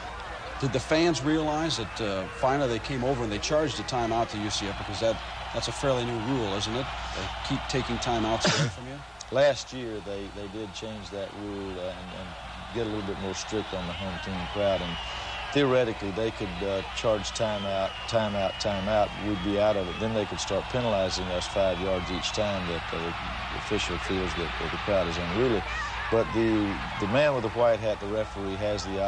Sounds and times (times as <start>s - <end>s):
Speech: 0.5s - 29.0s.